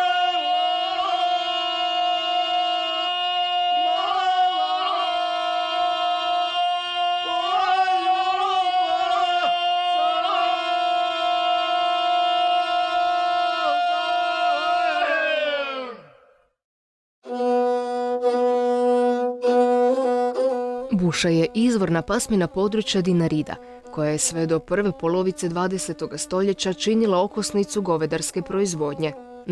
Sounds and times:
Music: 17.2 - 29.5
Speech: 20.9 - 29.5.

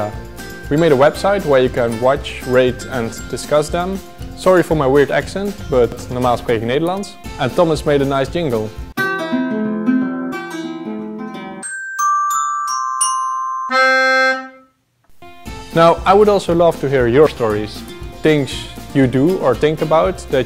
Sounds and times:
Glockenspiel: 0.0 - 4.0, 11.6 - 14.7
Speech: 0.0 - 8.8, 15.8 - 20.4
Inside, small room: 0.0 - 20.4.

